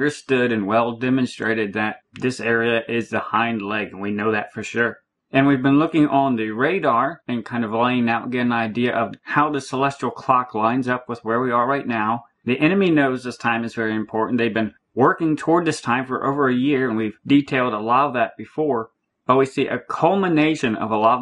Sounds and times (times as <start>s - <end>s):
Speech: 0.0s - 21.2s.